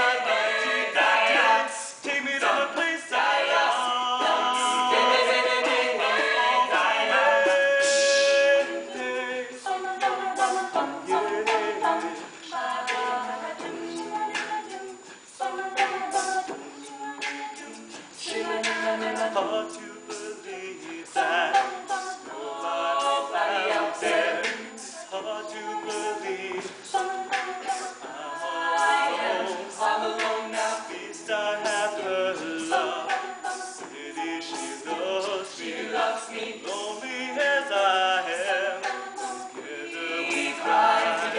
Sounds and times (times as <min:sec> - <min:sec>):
A capella: 0:00.0 - 0:41.3
Singing: 0:00.0 - 0:41.3.